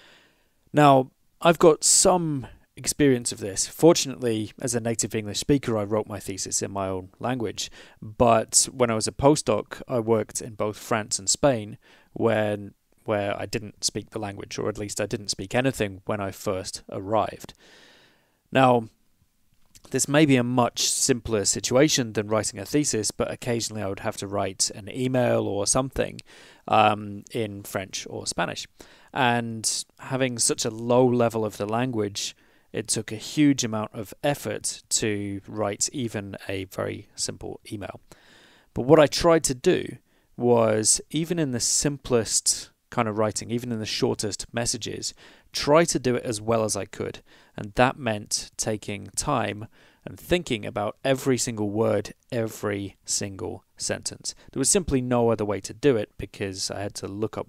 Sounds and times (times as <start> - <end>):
Speech: 0.7 - 17.6, 18.5 - 19.0, 19.8 - 38.0, 38.8 - 57.4.